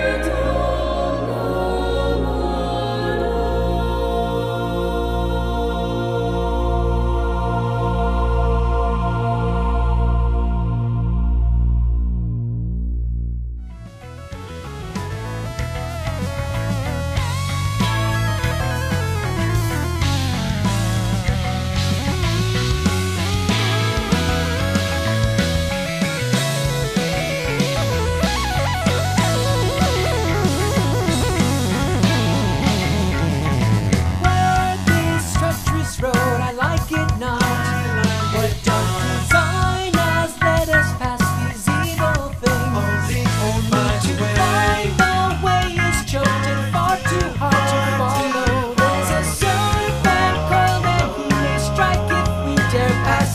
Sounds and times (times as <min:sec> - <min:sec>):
Music: 0:00.0 - 0:53.3.